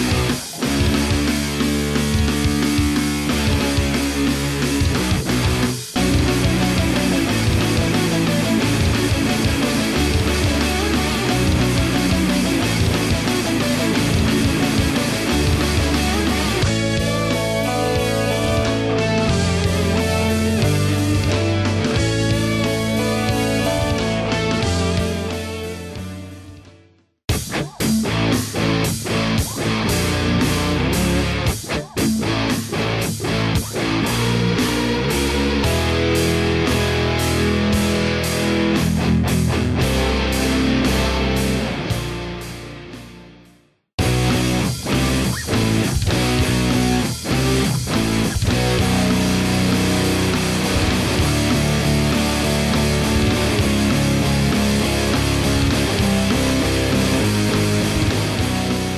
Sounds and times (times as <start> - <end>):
Strum: 0.0 - 26.0, 44.0 - 58.9
Electric guitar: 0.0 - 58.9.